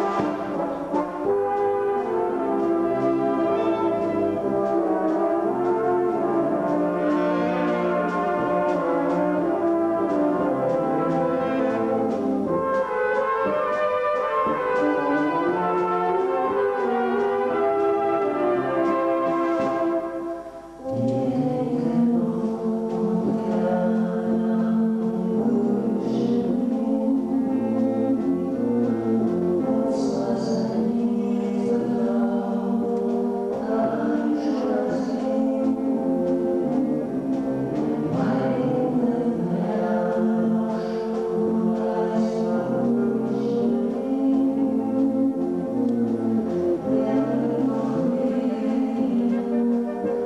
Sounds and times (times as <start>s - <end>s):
Music: 0.0s - 50.2s.